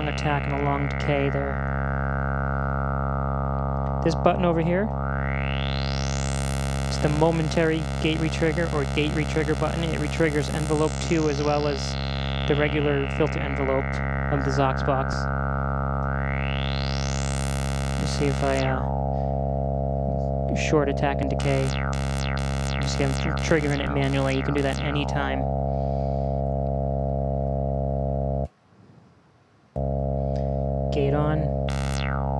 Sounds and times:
Speech: 0.0s - 1.6s, 4.0s - 5.0s, 6.9s - 15.3s, 18.0s - 18.9s, 20.5s - 21.8s, 22.8s - 25.5s, 30.9s - 31.5s.

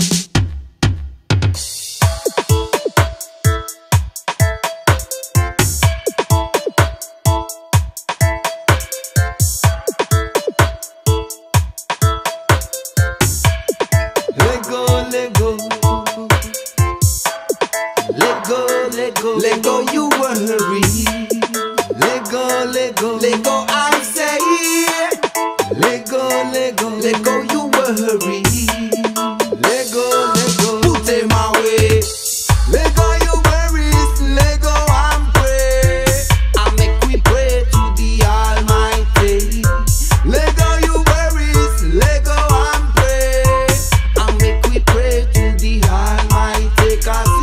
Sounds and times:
Music: 0.0s - 47.4s.

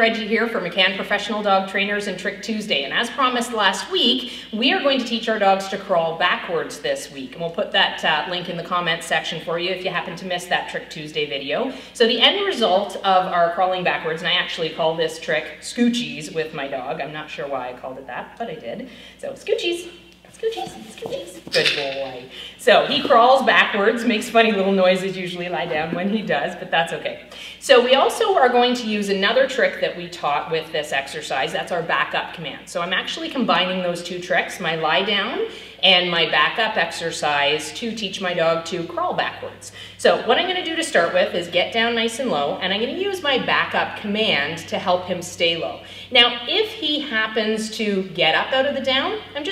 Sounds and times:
Speech: 0.0s - 49.5s.

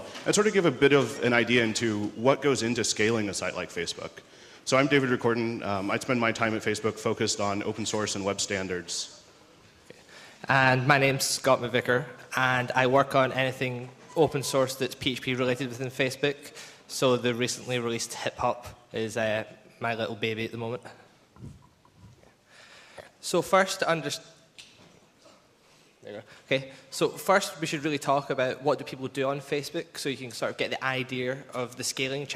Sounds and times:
Speech: 0.0s - 9.2s, 10.4s - 21.1s, 23.2s - 24.3s, 26.0s - 32.3s.

